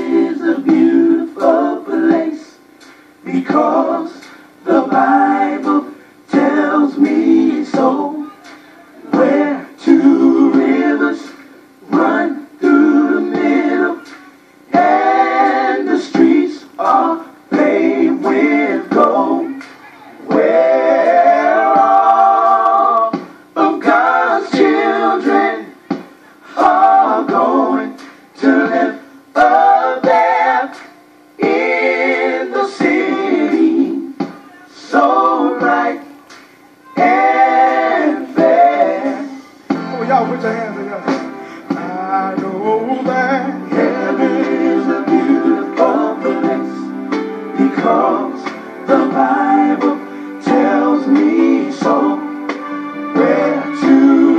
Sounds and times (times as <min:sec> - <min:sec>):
Music: 0:00.0 - 0:36.2, 0:36.8 - 0:54.3
Singing: 0:00.0 - 0:46.9, 0:47.6 - 0:54.3.